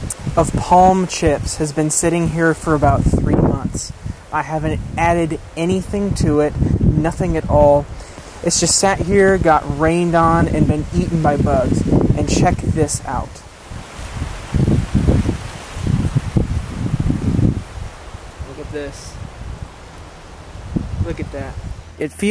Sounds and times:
Outside, rural or natural: 0.0s - 22.3s
Speech: 0.4s - 13.4s, 18.4s - 19.2s, 21.0s - 22.3s.

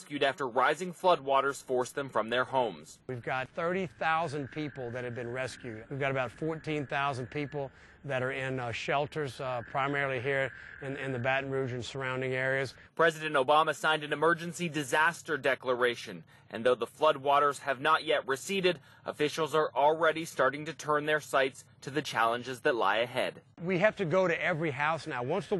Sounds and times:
Speech: 0.0s - 25.5s.

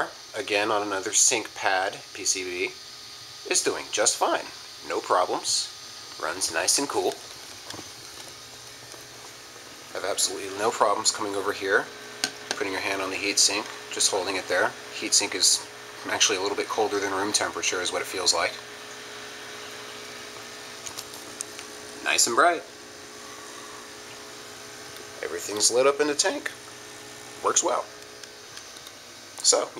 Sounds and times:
Speech: 0.0s - 2.8s, 3.4s - 7.2s, 9.9s - 11.9s, 12.5s - 18.6s, 22.0s - 22.7s, 25.2s - 26.6s, 27.4s - 27.9s, 29.4s - 29.7s.

